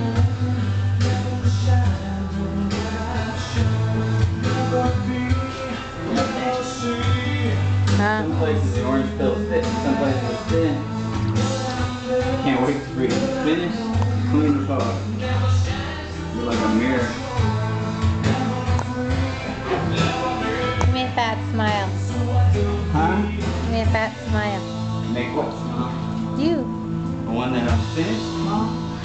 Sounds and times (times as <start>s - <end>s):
Music: 0.0s - 29.0s
Speech: 8.0s - 10.8s, 16.4s - 17.2s, 26.4s - 26.7s.